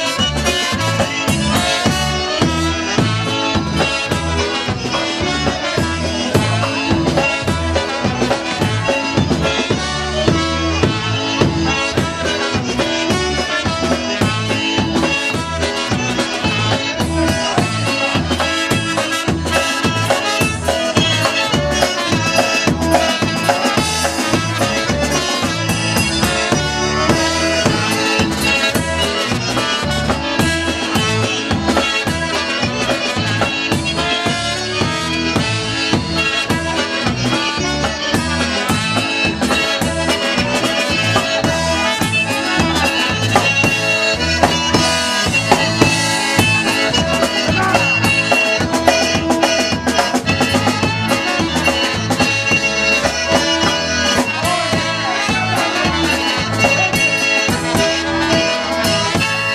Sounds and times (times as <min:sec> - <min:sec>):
Accordion: 0:00.0 - 0:59.5.